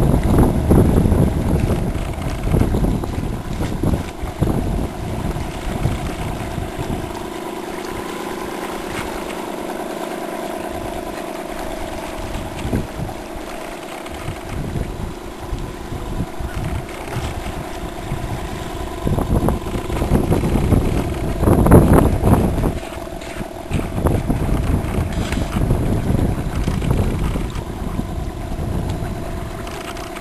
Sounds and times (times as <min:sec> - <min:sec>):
Motorboat, speedboat: 0:00.0 - 0:30.2.